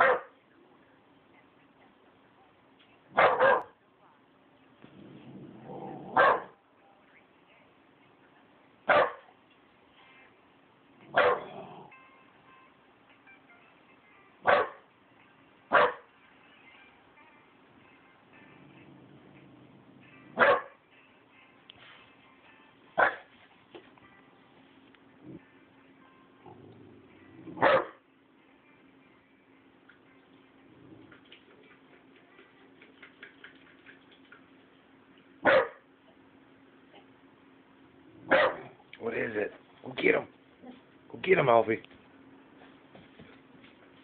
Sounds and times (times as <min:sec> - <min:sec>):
Bow-wow: 0:00.0 - 0:00.4, 0:03.1 - 0:03.8, 0:05.6 - 0:06.6, 0:08.9 - 0:09.2, 0:11.1 - 0:12.0, 0:14.4 - 0:14.8, 0:15.7 - 0:16.1, 0:20.3 - 0:20.8, 0:23.0 - 0:23.3, 0:27.4 - 0:28.0, 0:35.4 - 0:35.8, 0:38.2 - 0:38.8
Yip: 0:00.0 - 0:00.4, 0:03.1 - 0:03.8, 0:06.1 - 0:06.6, 0:08.9 - 0:09.2, 0:11.1 - 0:11.6, 0:14.4 - 0:14.9, 0:15.7 - 0:16.1, 0:20.3 - 0:20.8, 0:23.0 - 0:23.3, 0:27.6 - 0:28.0, 0:35.4 - 0:35.8, 0:38.3 - 0:38.8.